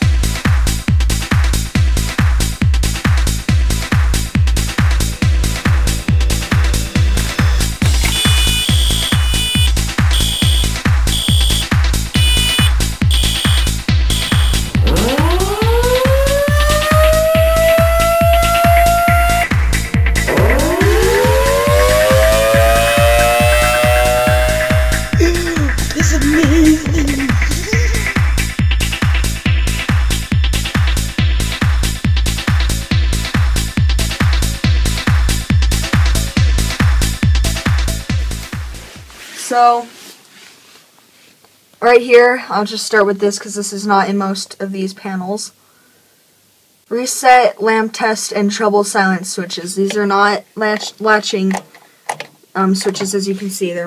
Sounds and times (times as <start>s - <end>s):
Drum and bass: 0.0s - 39.0s
Trance music: 2.5s - 38.5s
Techno: 2.8s - 38.4s
Electronica: 4.2s - 28.6s
Fire alarm: 6.9s - 19.4s, 20.3s - 24.8s.